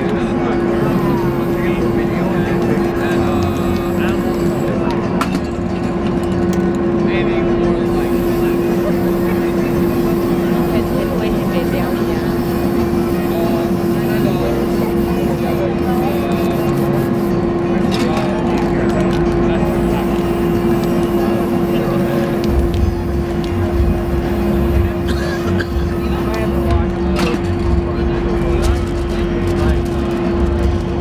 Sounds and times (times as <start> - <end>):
Speech: 0.0 - 5.2, 7.0 - 31.0
Spray: 0.8 - 4.6, 7.9 - 17.3, 19.7 - 26.7.